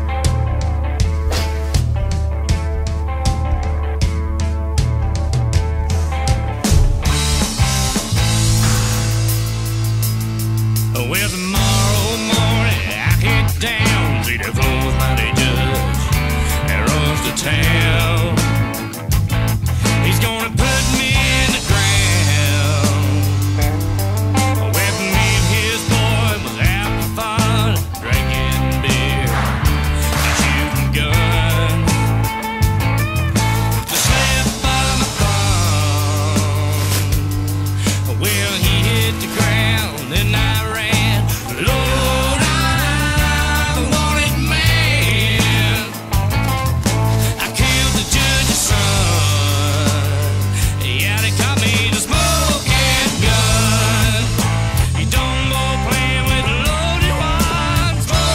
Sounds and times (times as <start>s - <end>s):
Blues: 0.0s - 58.3s
Rhythm and blues: 0.0s - 58.3s.